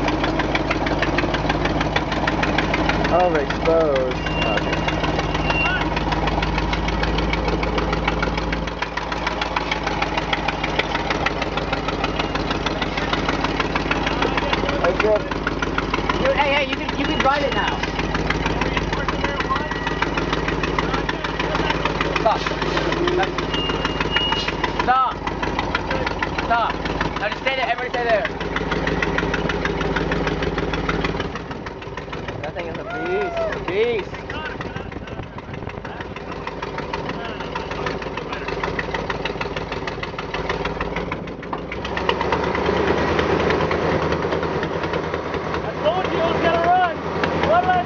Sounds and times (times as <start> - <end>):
Truck: 0.0 - 47.8.